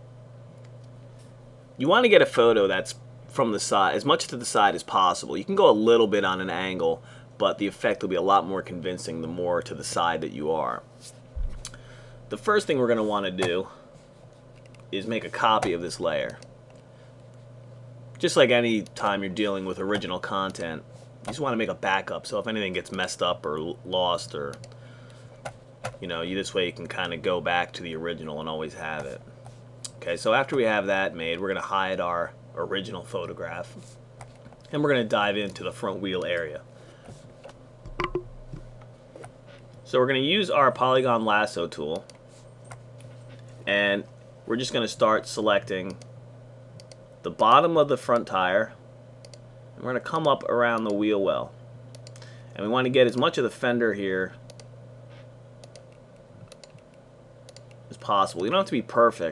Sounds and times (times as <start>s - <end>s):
Speech: 1.8s - 10.9s, 12.3s - 13.8s, 14.9s - 16.4s, 18.2s - 24.6s, 26.0s - 29.2s, 29.9s - 33.8s, 34.7s - 36.6s, 39.8s - 42.1s, 43.7s - 46.0s, 47.2s - 48.8s, 49.8s - 51.6s, 52.6s - 54.4s, 57.9s - 59.3s.